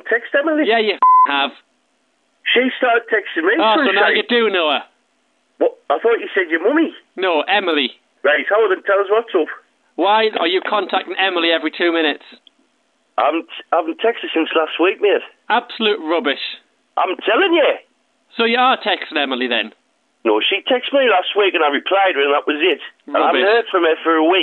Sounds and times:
Speech: 0:00.0 - 0:01.6, 0:02.4 - 0:05.0, 0:05.6 - 0:12.4, 0:13.2 - 0:24.4.

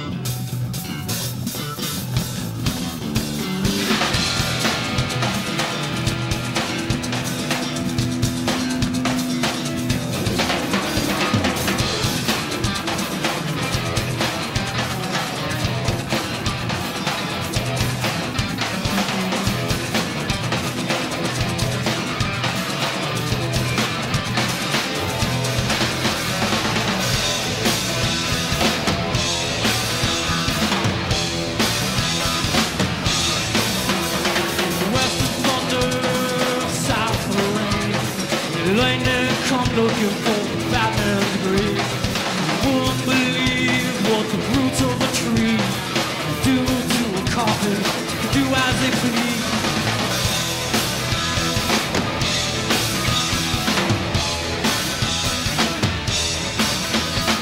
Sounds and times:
Music: 0:00.0 - 0:57.4.

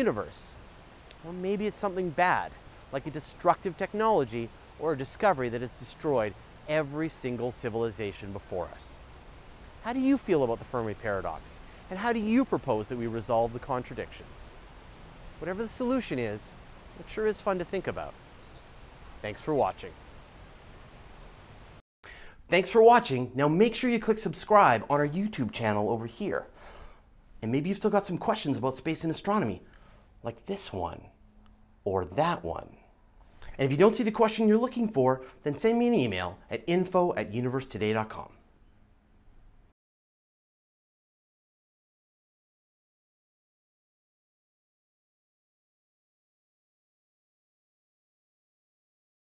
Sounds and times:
Speech: 0:00.0 - 0:00.6, 0:01.2 - 0:09.0, 0:09.8 - 0:14.5, 0:15.4 - 0:18.2, 0:19.2 - 0:19.9, 0:22.5 - 0:26.5, 0:27.4 - 0:29.6, 0:30.2 - 0:31.1, 0:31.9 - 0:32.9, 0:33.5 - 0:38.4.

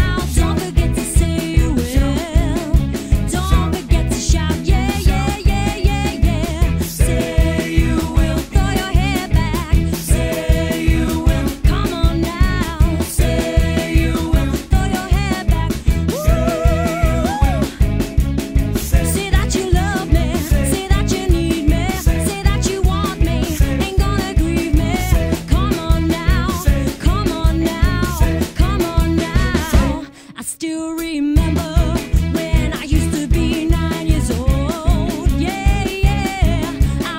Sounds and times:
Music: 0:00.0 - 0:37.1.

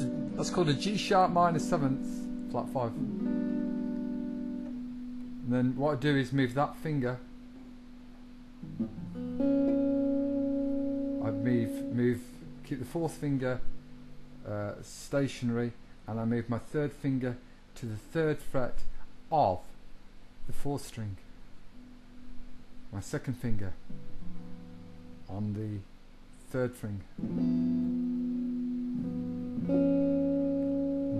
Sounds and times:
Speech: 0:00.0 - 0:03.0, 0:05.4 - 0:07.2, 0:11.2 - 0:13.7, 0:14.4 - 0:19.8, 0:20.5 - 0:21.3, 0:22.9 - 0:23.8, 0:25.3 - 0:25.9, 0:26.5 - 0:27.1
Music: 0:00.0 - 0:14.5, 0:23.8 - 0:25.3, 0:27.2 - 0:31.2.

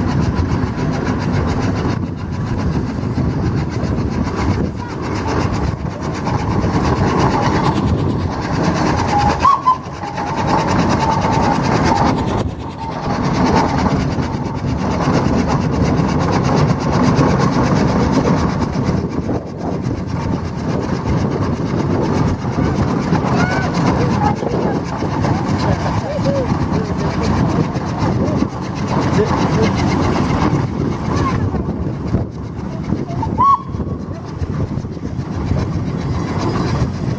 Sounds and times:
Engine: 0:00.0 - 0:37.1
Vehicle: 0:00.0 - 0:37.1.

